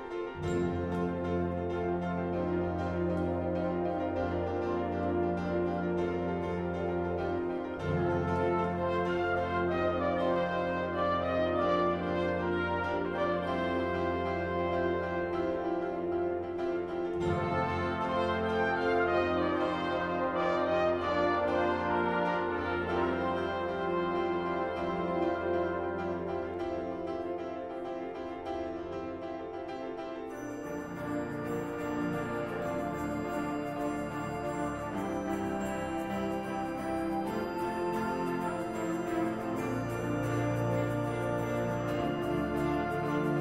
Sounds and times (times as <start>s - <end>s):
Music: 0.0s - 43.4s.